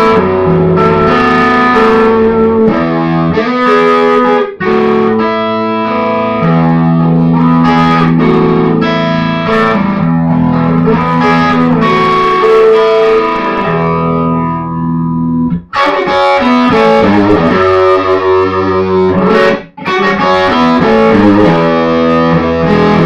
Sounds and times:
Effects unit: 0.0 - 23.0
Guitar: 0.0 - 23.0.

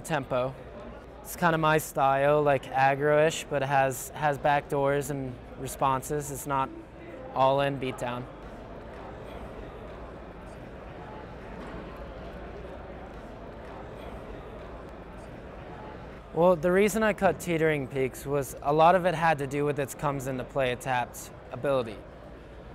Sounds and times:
Speech: 0.0 - 8.3, 15.9 - 22.0.

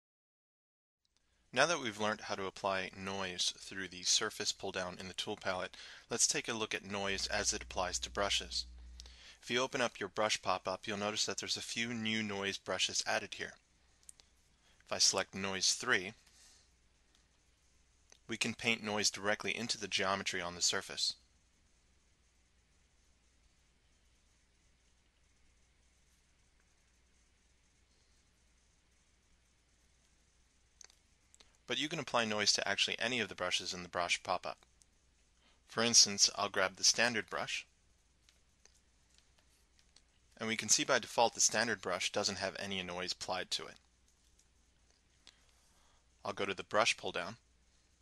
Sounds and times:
Speech: 1.5 - 8.8, 9.4 - 13.6, 14.9 - 16.2, 18.3 - 21.2, 31.7 - 34.7, 35.7 - 37.7, 40.4 - 43.8, 46.2 - 47.4.

